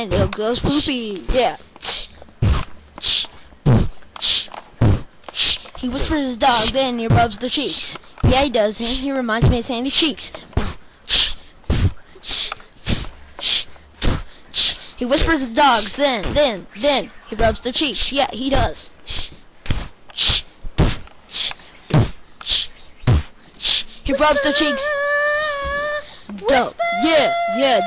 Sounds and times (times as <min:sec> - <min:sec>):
Speech: 0:00.0 - 0:01.6, 0:05.8 - 0:10.4, 0:15.0 - 0:18.9, 0:24.1 - 0:25.0, 0:26.3 - 0:27.8.